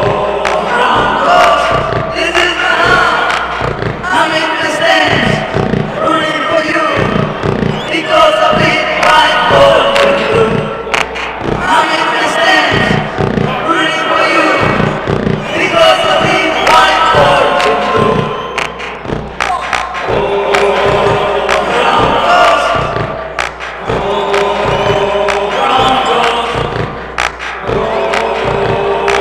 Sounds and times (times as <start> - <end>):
Mantra: 0.0 - 7.2, 7.8 - 10.7, 11.6 - 18.5, 19.6 - 23.1, 23.8 - 26.9, 27.6 - 29.2.